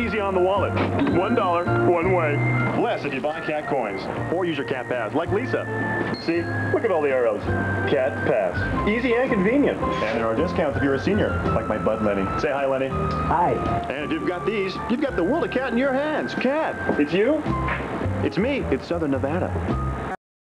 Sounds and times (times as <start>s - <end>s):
Music: 0.0s - 20.2s
Speech: 18.2s - 19.6s.